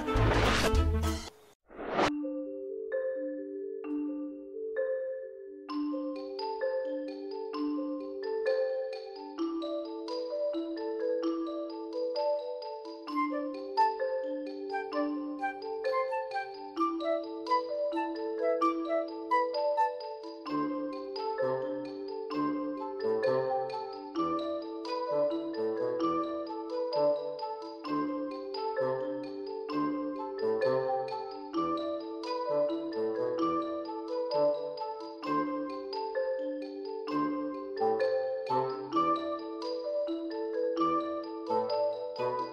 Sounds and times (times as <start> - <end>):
Music: 0.0 - 42.5.